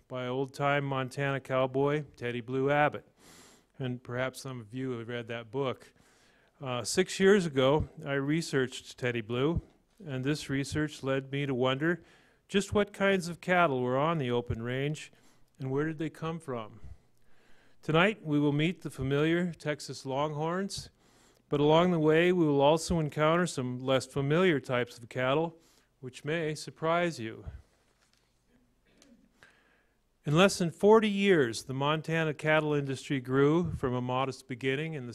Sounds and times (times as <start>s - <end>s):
Speech: 0.0s - 3.1s, 3.8s - 6.0s, 6.6s - 16.9s, 17.8s - 27.6s, 30.2s - 35.1s.